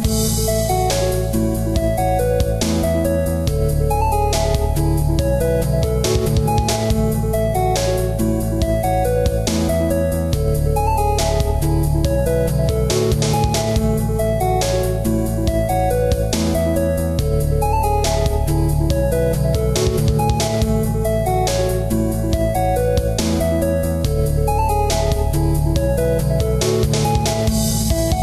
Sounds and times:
Music: 0.0 - 28.2.

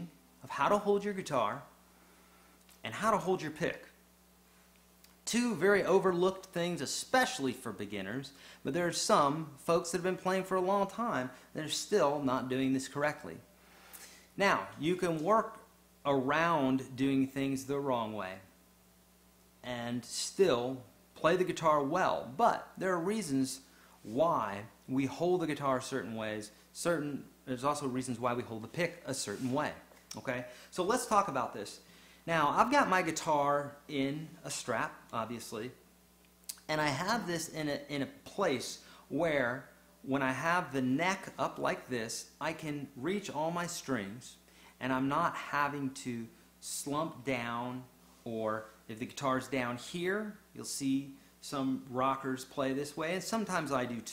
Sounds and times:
Speech: 0.0 - 1.8, 2.8 - 4.0, 5.2 - 13.5, 14.4 - 18.6, 19.6 - 35.8, 36.5 - 54.1.

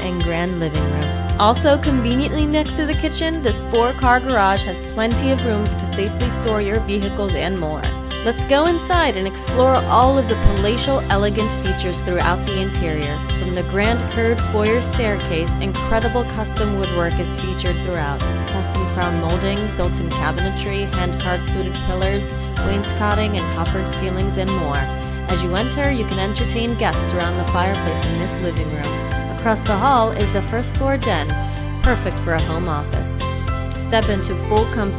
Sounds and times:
Music: 0.0 - 34.9
Speech: 0.0 - 34.9.

